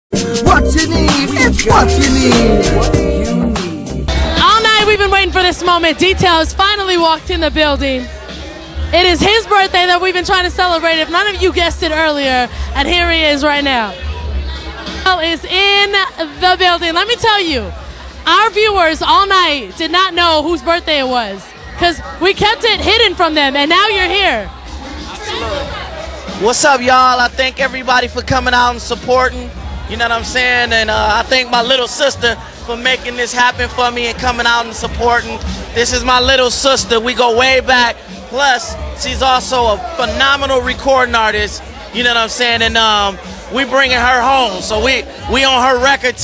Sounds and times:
Hip hop music: 0.1 - 46.2.

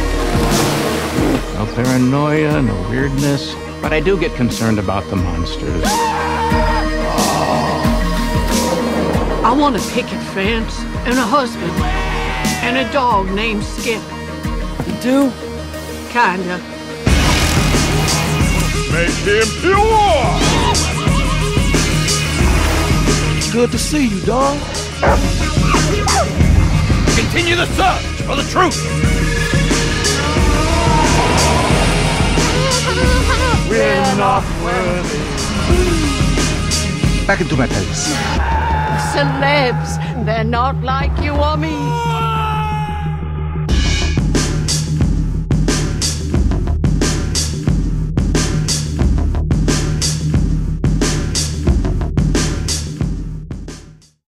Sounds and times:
Music: 0.0 - 54.2.

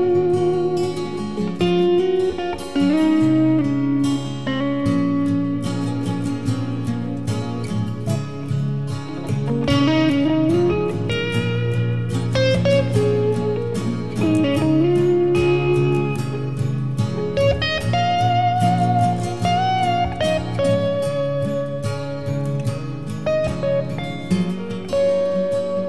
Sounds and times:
Steel guitar, slide guitar: 0.0 - 25.8.

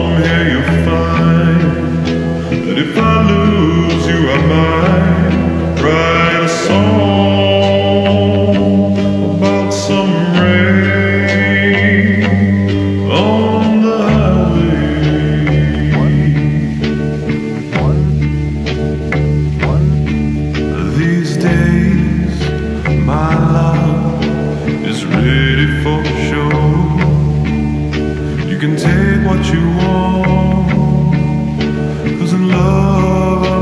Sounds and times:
Music: 0.0 - 33.6.

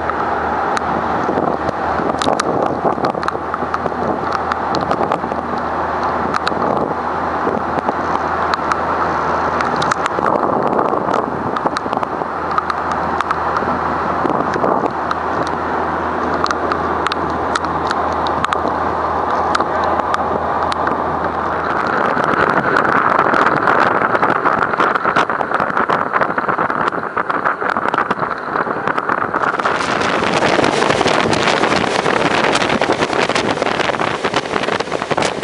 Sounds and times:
Motorboat, speedboat: 0.0 - 35.4.

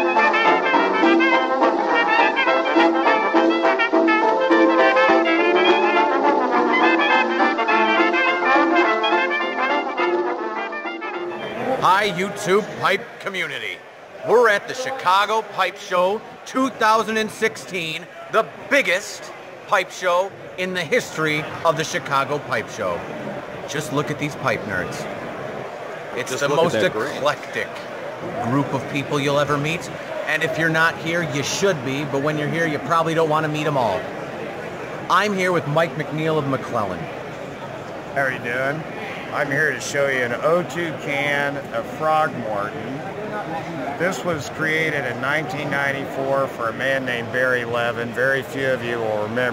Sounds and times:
Speech: 11.6 - 23.0, 26.2 - 34.1, 35.1 - 37.1, 38.2 - 49.5.

